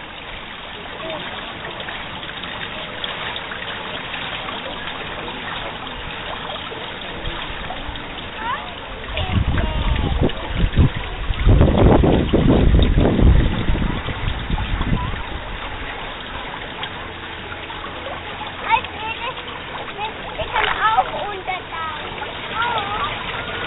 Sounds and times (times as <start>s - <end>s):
Speech: 8.4s - 10.5s, 18.3s - 23.2s.